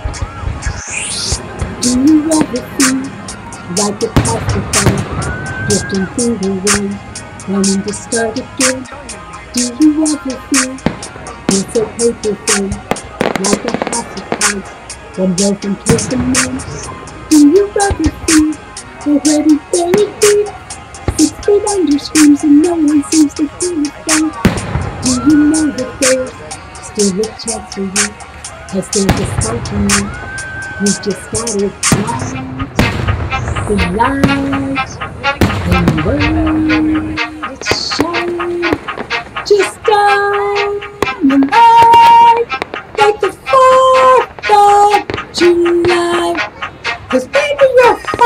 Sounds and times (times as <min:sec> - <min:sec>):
Music: 0:00.0 - 0:48.2
Singing: 0:00.0 - 0:48.2
Fireworks: 0:00.1 - 0:03.2, 0:03.8 - 0:07.0, 0:09.6 - 0:18.6, 0:19.2 - 0:26.3, 0:28.9 - 0:36.4.